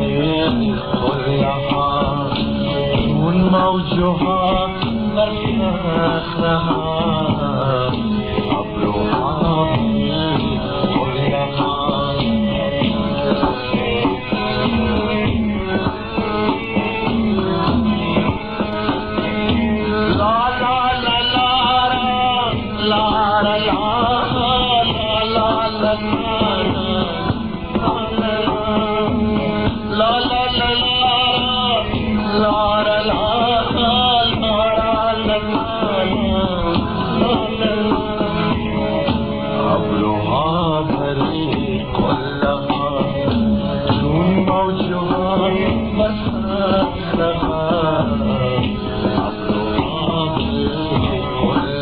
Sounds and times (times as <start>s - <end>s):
Music: 0.0s - 51.8s.